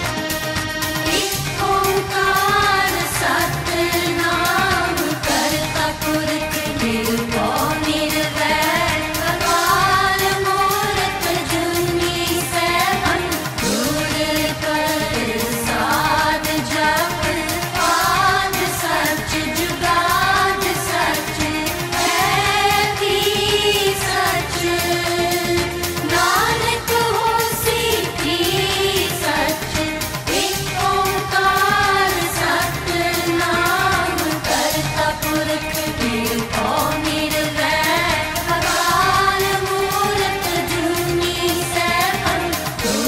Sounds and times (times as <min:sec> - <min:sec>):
Music of Asia: 0:00.0 - 0:43.0
Singing: 0:00.0 - 0:43.0.